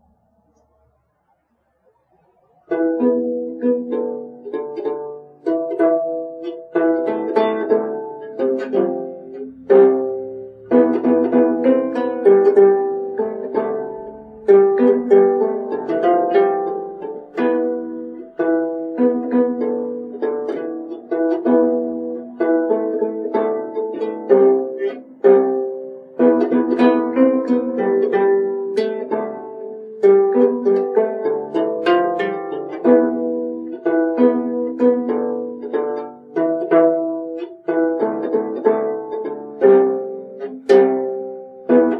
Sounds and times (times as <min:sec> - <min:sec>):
Mandolin: 0:02.1 - 0:41.9.